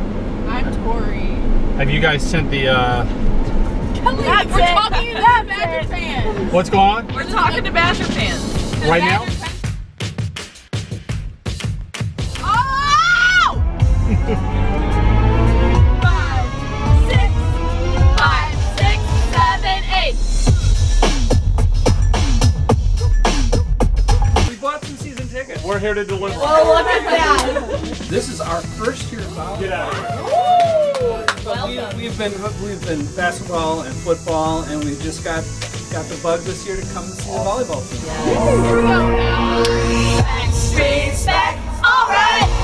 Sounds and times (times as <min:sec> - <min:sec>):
Music: 0:04.3 - 0:42.6.